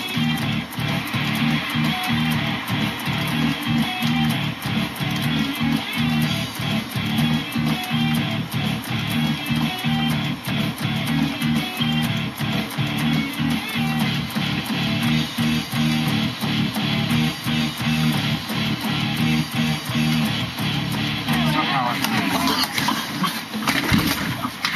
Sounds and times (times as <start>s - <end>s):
Electric guitar: 0.0s - 24.7s.